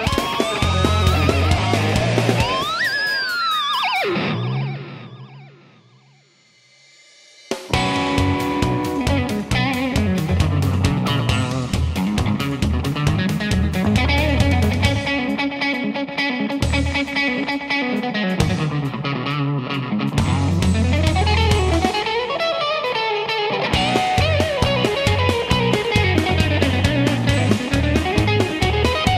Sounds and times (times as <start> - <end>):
Electric guitar: 0.0 - 6.5, 7.5 - 29.1.